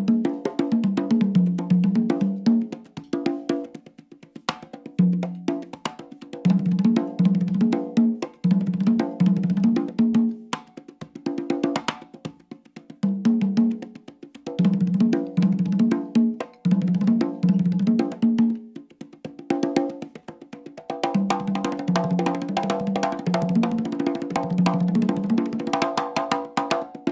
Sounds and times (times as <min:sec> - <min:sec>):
Drum: 0:00.0 - 0:27.1.